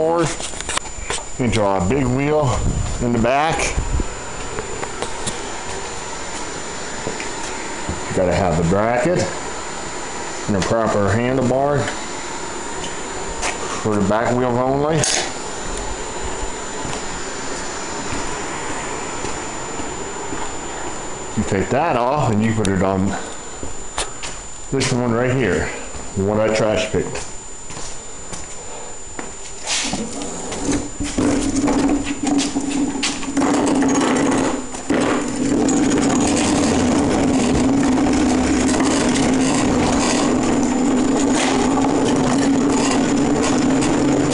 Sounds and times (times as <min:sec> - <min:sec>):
Speech: 0:00.0 - 0:00.4, 0:01.4 - 0:03.8, 0:08.1 - 0:09.4, 0:10.5 - 0:12.0, 0:13.8 - 0:15.2, 0:21.4 - 0:23.3, 0:24.7 - 0:27.3.